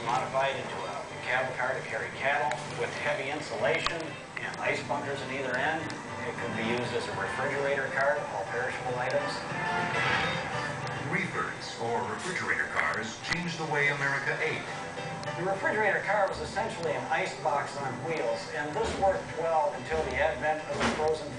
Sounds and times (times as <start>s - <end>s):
Speech: 0.0s - 9.4s, 11.0s - 14.7s, 15.4s - 21.3s
Music: 0.0s - 21.3s.